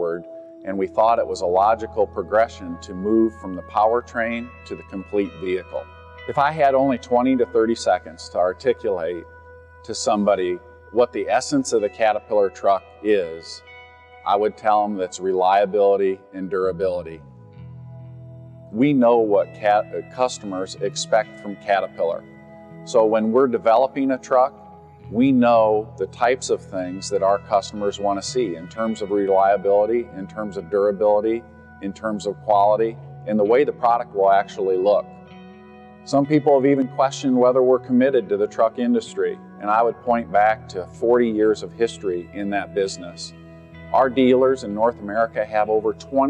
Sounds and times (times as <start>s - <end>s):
Speech: 0.0s - 9.2s, 9.9s - 13.6s, 14.3s - 17.2s, 18.8s - 22.2s, 22.9s - 24.5s, 25.1s - 35.0s, 36.1s - 43.3s, 44.0s - 46.2s
Music: 0.0s - 46.2s.